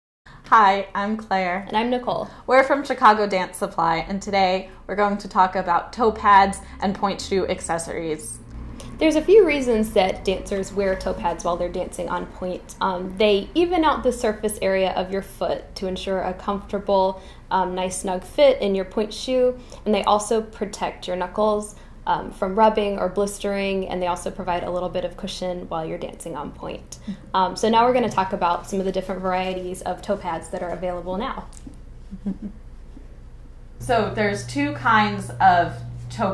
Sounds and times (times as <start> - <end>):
Speech: 0.5 - 8.4, 9.0 - 31.6, 33.8 - 36.3.